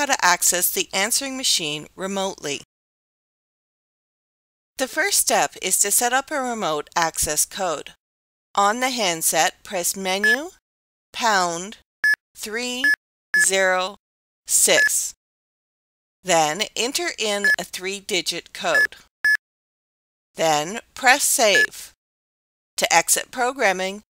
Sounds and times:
Speech: 0.0 - 2.7, 4.8 - 8.0, 8.6 - 10.6, 11.2 - 11.8, 12.4 - 15.2, 16.3 - 19.0, 20.4 - 22.0, 22.8 - 24.1.

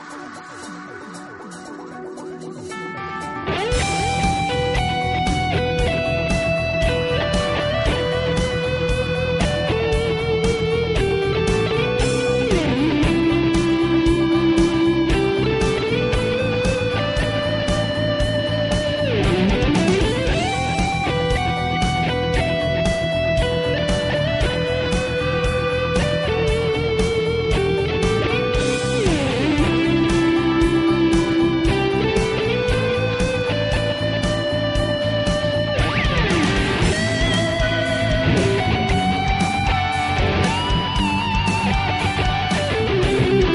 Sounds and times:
Guitar: 0.0 - 43.5.

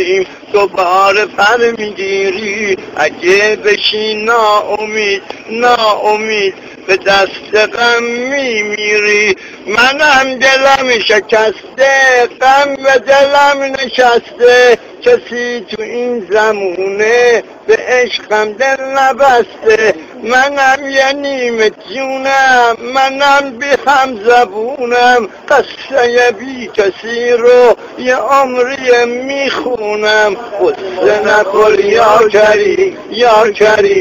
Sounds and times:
Speech: 0.0 - 34.0.

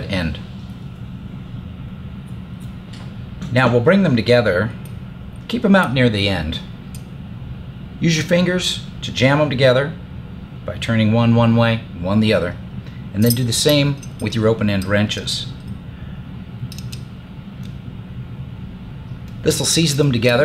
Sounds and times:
Speech: 0.0 - 0.5, 3.5 - 4.8, 5.5 - 6.7, 8.0 - 10.0, 10.6 - 12.6, 13.2 - 15.6, 19.4 - 20.4.

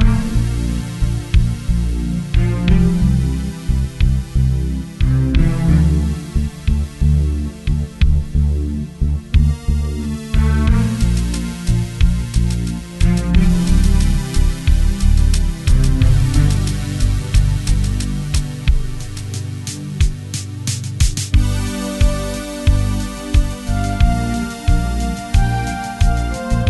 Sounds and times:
Music: 0.0 - 26.7.

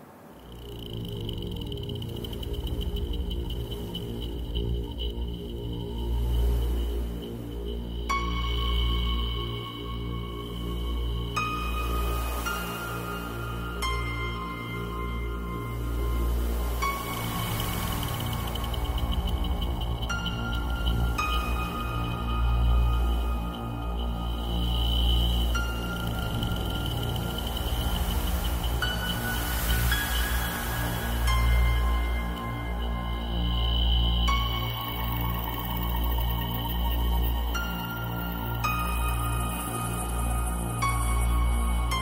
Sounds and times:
Music: 0.4 - 42.0.

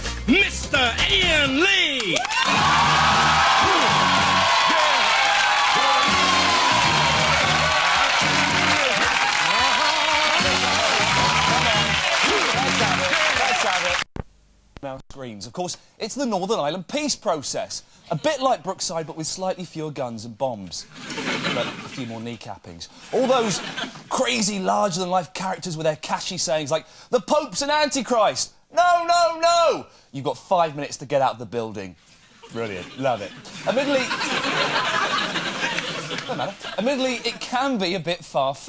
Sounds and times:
Music: 0.0 - 1.8, 2.5 - 4.8, 5.7 - 13.6
Speech: 14.8 - 20.9, 21.6 - 34.2, 36.3 - 38.6.

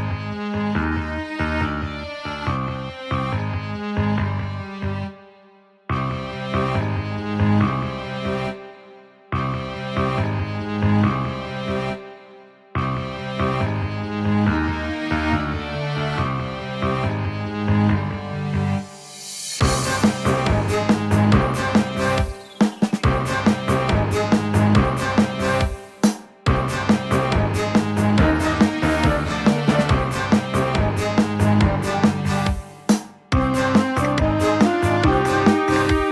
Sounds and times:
Music: 0.0 - 36.1.

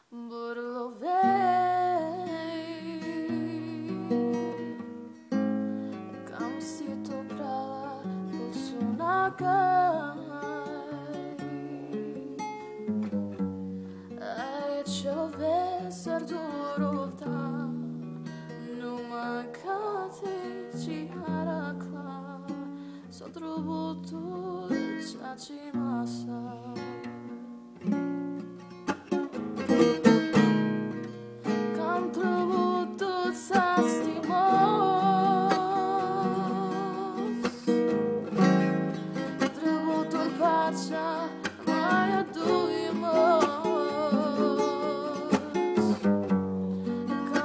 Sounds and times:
Female singing: 0.0 - 4.8, 6.2 - 12.5, 14.2 - 17.9, 18.6 - 27.1, 31.7 - 37.8, 39.4 - 46.0, 47.1 - 47.4
Music: 0.0 - 47.4.

